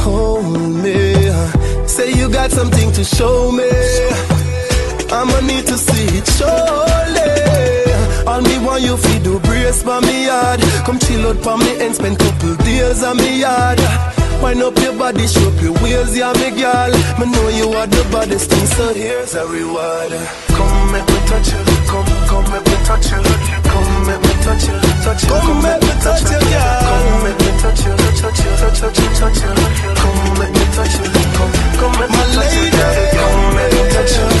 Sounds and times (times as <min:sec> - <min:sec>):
Pop music: 0:00.0 - 0:34.4.